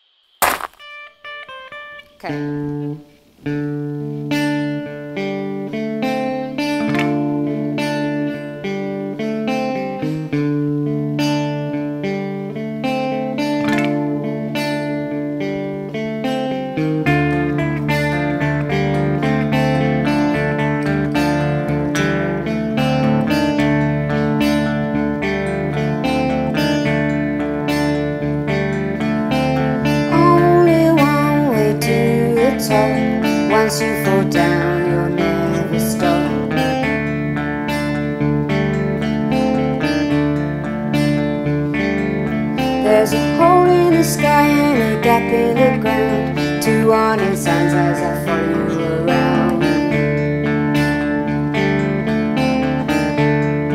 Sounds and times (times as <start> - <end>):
Music: 0.8 - 53.7.